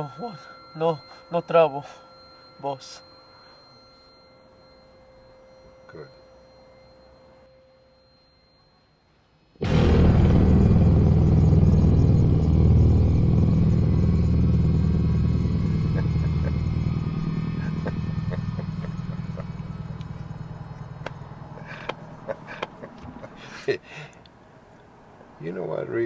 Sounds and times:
Outside, urban or manmade: 0.0s - 26.0s
Rumble: 9.6s - 22.4s
Vehicle: 10.5s - 26.0s.

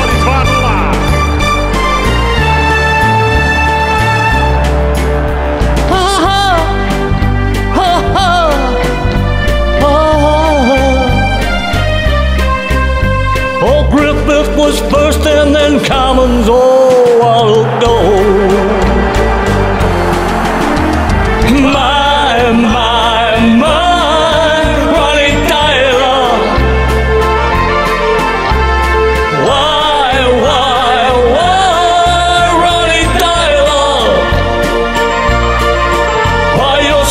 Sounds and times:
Music: 0.0s - 37.1s.

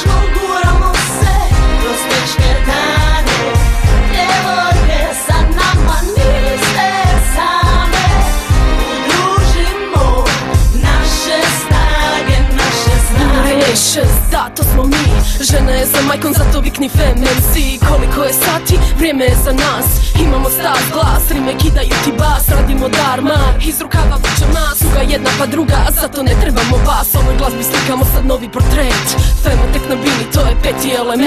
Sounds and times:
Music: 0.0s - 31.2s.

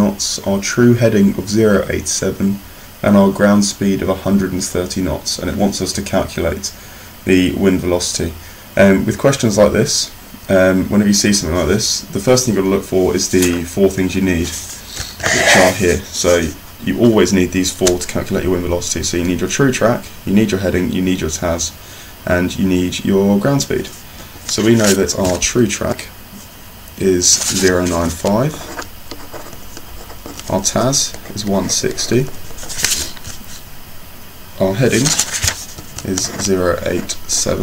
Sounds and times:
Speech: 0.0s - 26.2s, 27.0s - 28.8s, 30.4s - 32.4s, 34.6s - 35.2s, 36.0s - 37.6s.

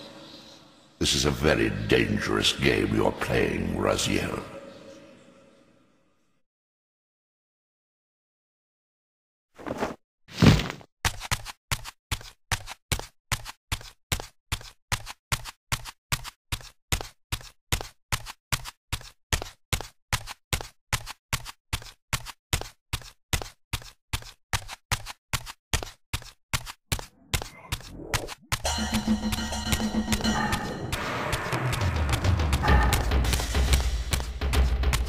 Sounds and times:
Speech: 1.0s - 4.7s.

